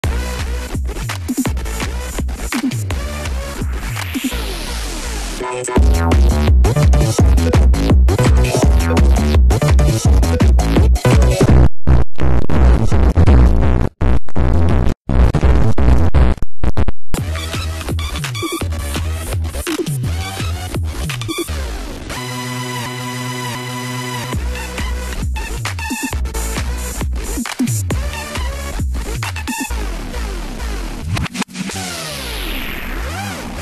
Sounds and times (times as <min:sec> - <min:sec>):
Electronic dance music: 0:00.1 - 0:13.4.